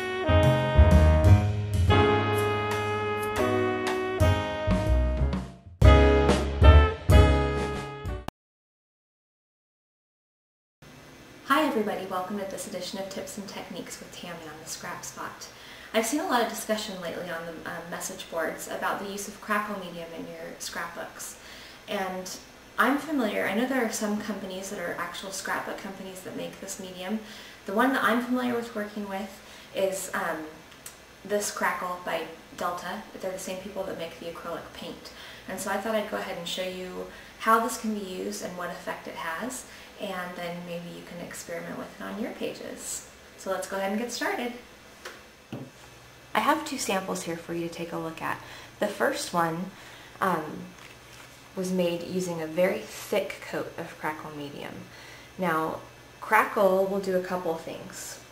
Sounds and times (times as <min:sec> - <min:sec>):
Speech: 0:11.5 - 0:30.6, 0:31.3 - 0:44.6, 0:46.4 - 0:50.7, 0:51.6 - 0:58.3.